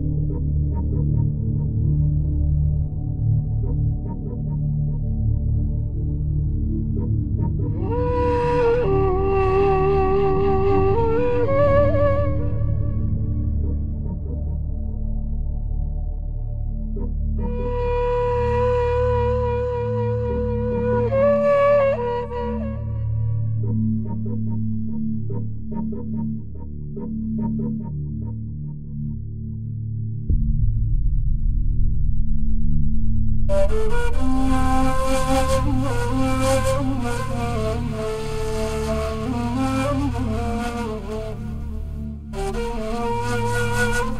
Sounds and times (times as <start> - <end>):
Music: 0.0 - 44.1.